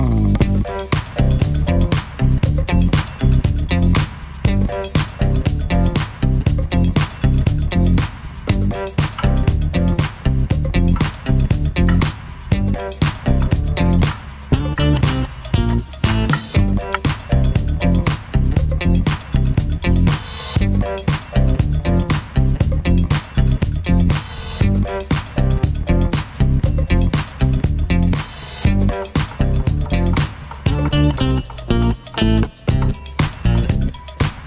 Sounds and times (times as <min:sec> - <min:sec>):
Music: 0:00.0 - 0:34.4.